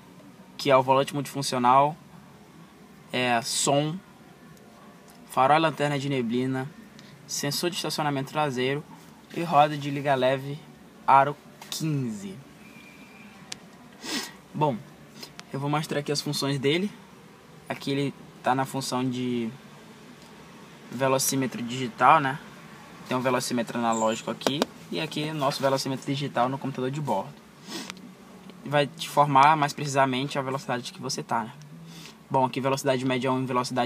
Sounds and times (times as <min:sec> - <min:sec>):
Speech: 0:00.6 - 0:02.0, 0:03.1 - 0:04.0, 0:05.2 - 0:06.7, 0:07.3 - 0:12.4, 0:14.6 - 0:14.9, 0:15.5 - 0:17.0, 0:17.7 - 0:19.6, 0:20.9 - 0:22.4, 0:23.1 - 0:27.4, 0:28.6 - 0:31.6, 0:32.3 - 0:33.8.